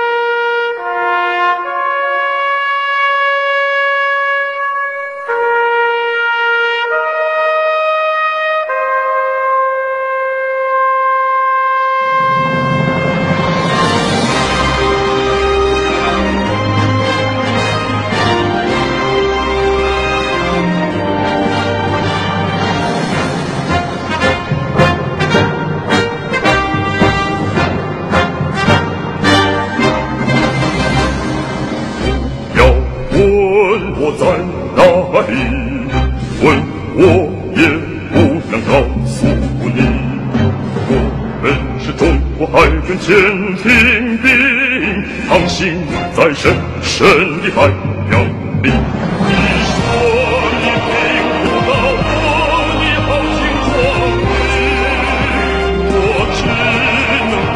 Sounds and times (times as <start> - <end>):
Trumpet: 0.0 - 34.4, 46.2 - 57.5.